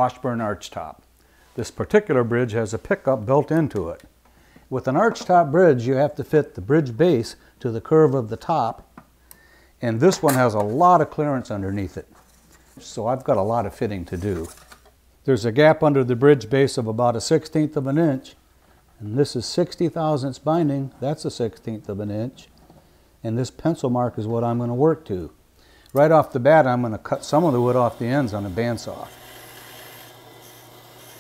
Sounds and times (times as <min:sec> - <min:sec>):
Speech: 0:00.0 - 0:01.0, 0:01.6 - 0:04.1, 0:04.7 - 0:08.8, 0:09.8 - 0:12.1, 0:12.8 - 0:14.6, 0:15.2 - 0:18.4, 0:19.0 - 0:22.5, 0:23.2 - 0:25.4, 0:26.0 - 0:29.2.